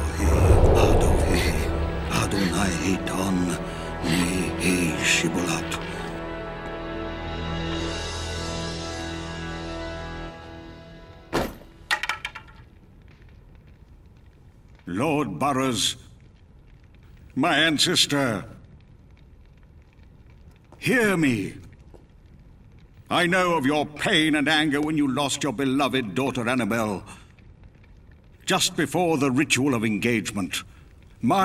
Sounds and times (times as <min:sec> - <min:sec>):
Speech: 0:00.0 - 0:06.0, 0:14.9 - 0:16.1, 0:17.4 - 0:18.6, 0:20.8 - 0:21.7, 0:23.1 - 0:27.2, 0:28.5 - 0:31.4
Music: 0:00.0 - 0:12.0.